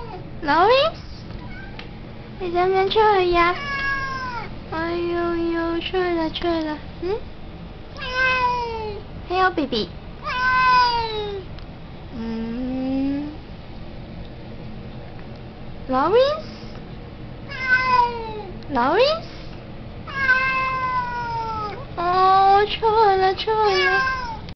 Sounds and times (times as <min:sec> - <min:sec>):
Speech: 0:00.4 - 0:01.0, 0:02.4 - 0:03.6, 0:04.7 - 0:07.2, 0:09.3 - 0:10.0, 0:15.9 - 0:16.5, 0:18.7 - 0:19.3, 0:22.0 - 0:24.1
Meow: 0:01.4 - 0:01.8, 0:03.6 - 0:04.5, 0:08.0 - 0:09.0, 0:10.2 - 0:11.4, 0:17.5 - 0:18.5, 0:20.1 - 0:21.8, 0:23.6 - 0:24.5.